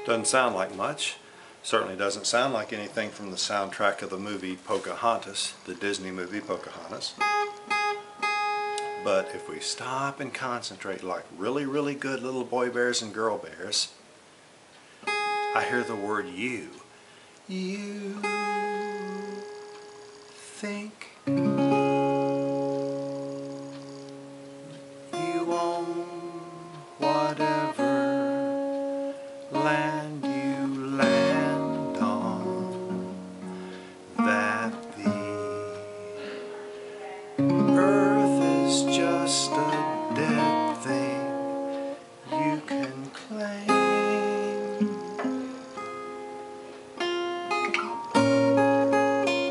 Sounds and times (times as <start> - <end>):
Music: 0.0 - 1.0, 7.2 - 9.9, 15.1 - 16.2, 18.0 - 20.4, 21.3 - 49.5.